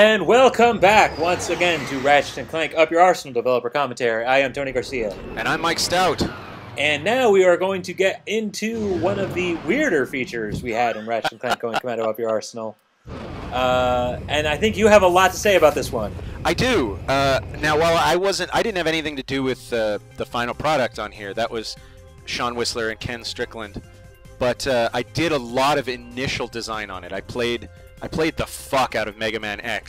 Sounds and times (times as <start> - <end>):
Speech: 0.0 - 12.8, 13.6 - 23.8, 24.4 - 29.8.